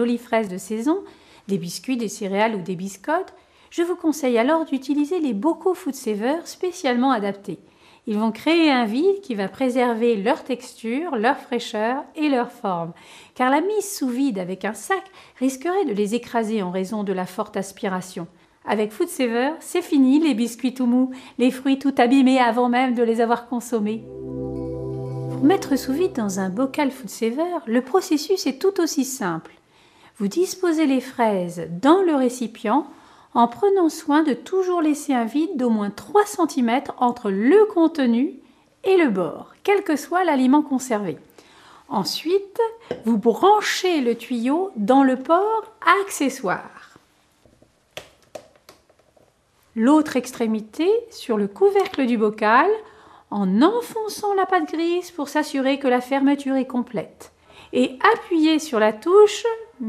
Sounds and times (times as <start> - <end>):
Speech: 0.0 - 24.1, 25.4 - 29.5, 30.2 - 41.3, 41.9 - 47.0, 49.8 - 59.8
Music: 23.8 - 27.5.